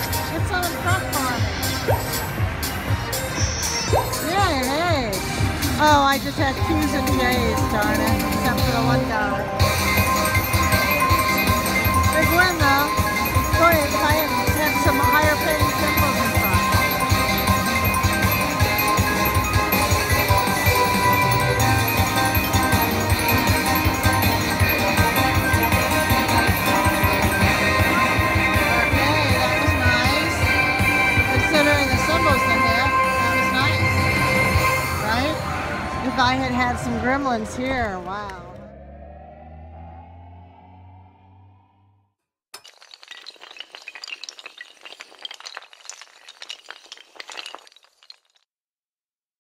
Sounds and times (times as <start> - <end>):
Inside, public space: 0.0 - 38.5
Speech: 4.2 - 5.2, 5.8 - 9.4, 36.1 - 38.6.